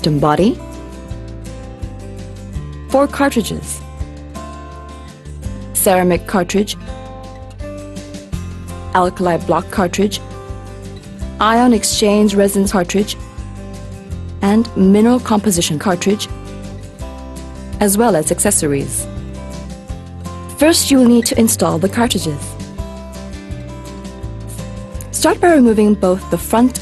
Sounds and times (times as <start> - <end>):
Speech: 0.0 - 0.6, 2.9 - 3.8, 5.8 - 6.8, 9.0 - 10.2, 11.4 - 13.2, 14.4 - 16.3, 17.8 - 19.1, 20.5 - 22.6, 25.1 - 26.8
Music: 0.0 - 26.8.